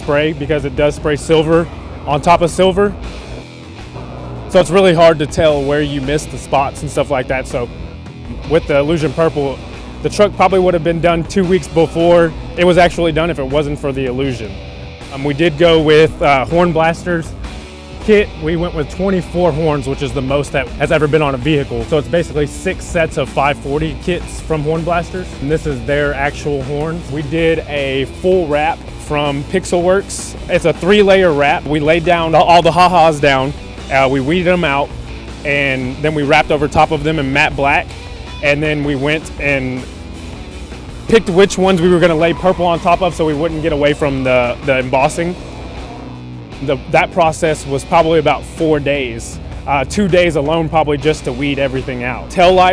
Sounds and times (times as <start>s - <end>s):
Speech: 0.0s - 3.0s, 4.5s - 7.7s, 8.3s - 17.3s, 18.0s - 39.9s, 41.1s - 45.4s, 46.6s - 52.7s
Music: 0.0s - 52.7s.